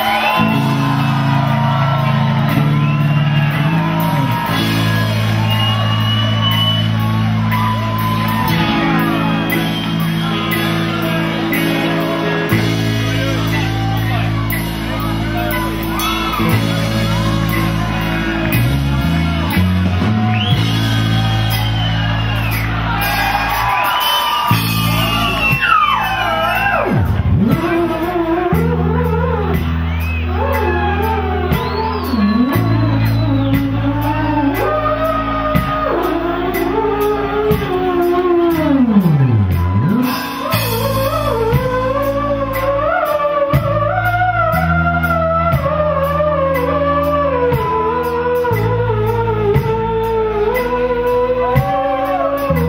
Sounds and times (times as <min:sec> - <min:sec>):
Music: 0:00.0 - 0:52.6.